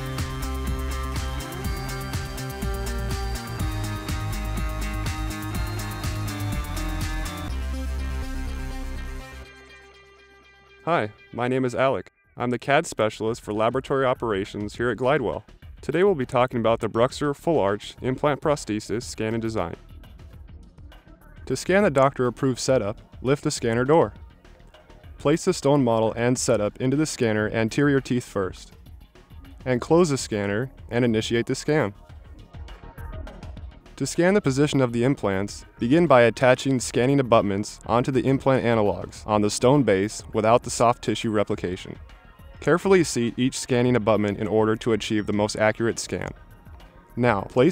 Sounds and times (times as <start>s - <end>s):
Music: 0.0s - 47.7s
Speech: 10.9s - 19.8s, 21.5s - 24.2s, 25.2s - 28.7s, 29.6s - 32.0s, 34.0s - 42.0s, 42.6s - 46.4s, 47.2s - 47.7s.